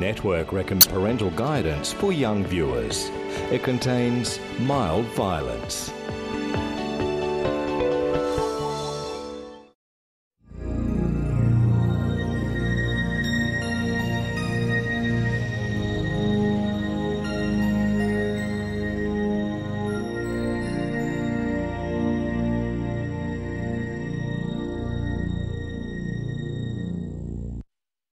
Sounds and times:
Music: 0:00.0 - 0:09.8, 0:10.4 - 0:27.6.

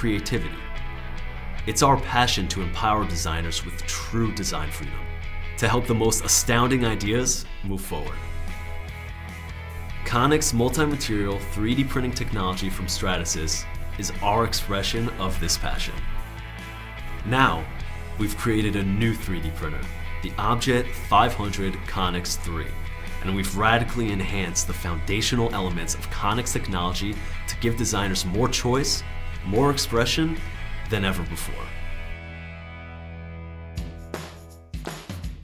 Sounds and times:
Speech: 0:00.0 - 0:00.6, 0:01.7 - 0:08.3, 0:10.0 - 0:16.1, 0:17.2 - 0:31.8
Music: 0:00.0 - 0:35.4.

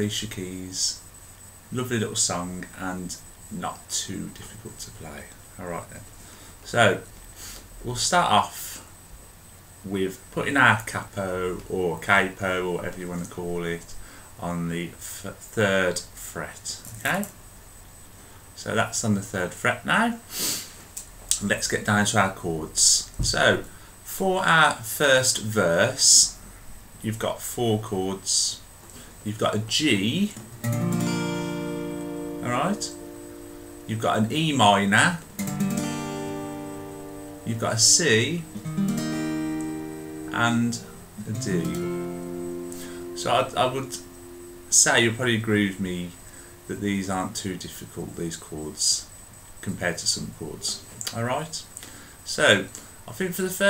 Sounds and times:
Speech: 0:00.0 - 0:01.0, 0:01.7 - 0:07.1, 0:07.8 - 0:08.9, 0:09.8 - 0:17.4, 0:18.6 - 0:20.2, 0:21.3 - 0:26.4, 0:27.0 - 0:30.4, 0:32.4 - 0:33.0, 0:33.9 - 0:35.2, 0:37.4 - 0:38.5, 0:40.3 - 0:41.8, 0:43.2 - 0:44.1, 0:44.7 - 0:53.6.

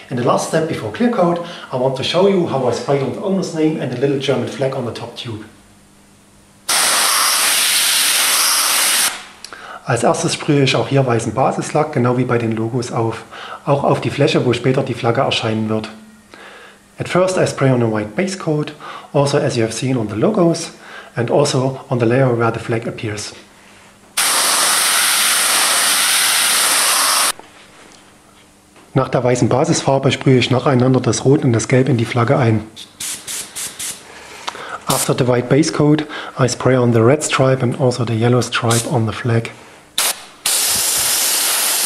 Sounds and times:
Speech: 0:00.0 - 0:05.6, 0:09.8 - 0:16.0, 0:17.0 - 0:23.5, 0:28.9 - 0:32.8, 0:34.8 - 0:39.6
Spray: 0:06.7 - 0:09.3, 0:24.2 - 0:27.4, 0:33.0 - 0:34.0, 0:40.0 - 0:41.8.

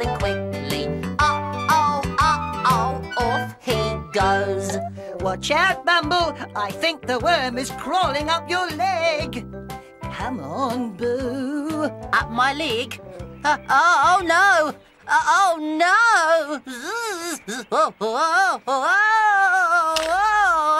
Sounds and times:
Music for children: 0:00.0 - 0:15.6.

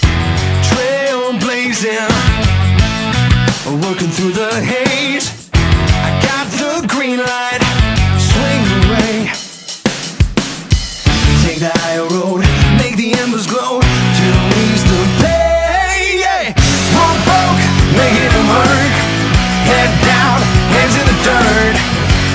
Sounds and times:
Music: 0:00.0 - 0:22.3.

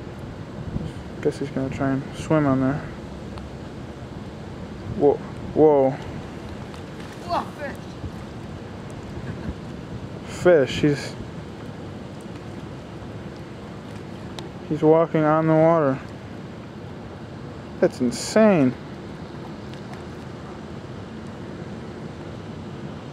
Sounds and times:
Speech: 0:01.2 - 0:02.9, 0:10.3 - 0:11.2, 0:14.7 - 0:16.1, 0:17.8 - 0:18.8.

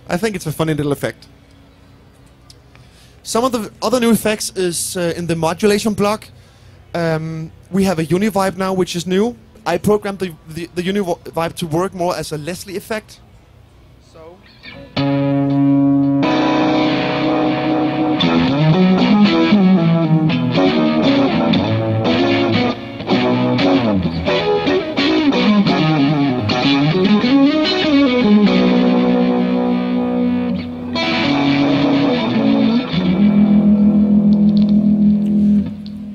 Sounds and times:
Speech: 0:00.1 - 0:01.3, 0:03.3 - 0:06.3, 0:07.0 - 0:13.2, 0:14.0 - 0:14.5
Bass guitar: 0:14.6 - 0:36.1
Effects unit: 0:14.6 - 0:36.1
Heavy metal: 0:15.0 - 0:35.9.

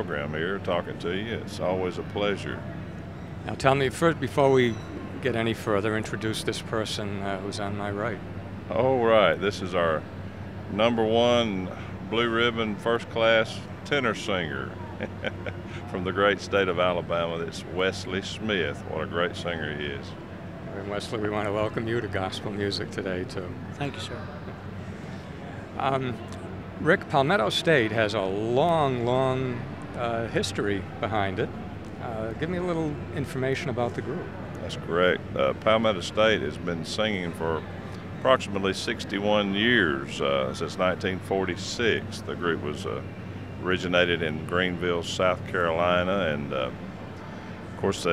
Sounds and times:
Speech: 0:00.0 - 0:02.7, 0:03.5 - 0:10.0, 0:10.7 - 0:15.1, 0:15.8 - 0:24.2, 0:25.8 - 0:37.6, 0:38.2 - 0:46.8, 0:47.8 - 0:48.1.

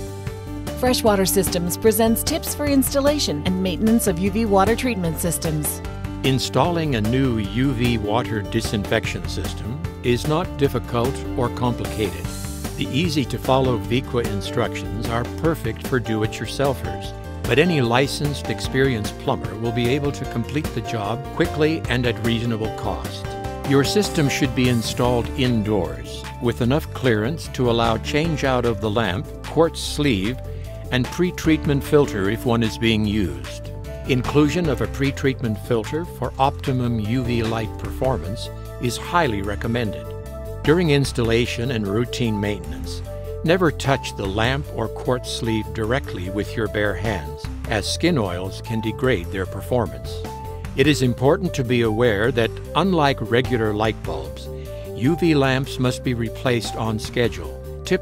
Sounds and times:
Music: 0:00.0 - 0:58.0
Speech: 0:00.8 - 0:50.2, 0:50.8 - 0:58.0.

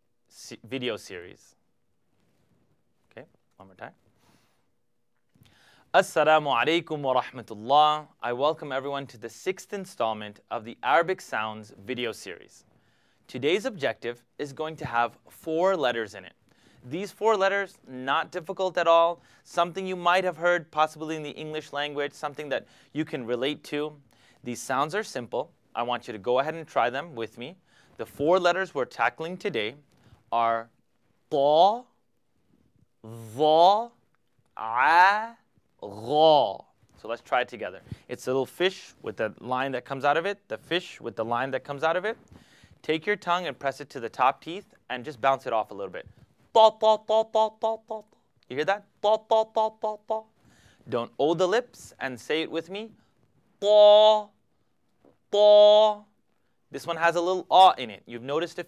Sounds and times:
Speech: 0:00.3 - 0:01.6, 0:03.1 - 0:04.0, 0:05.9 - 0:12.6, 0:13.3 - 0:32.0, 0:33.0 - 0:34.0, 0:34.6 - 0:42.2, 0:42.8 - 0:50.3, 0:50.9 - 0:53.0, 0:53.6 - 0:54.4, 0:55.3 - 0:56.1, 0:56.7 - 0:58.6.

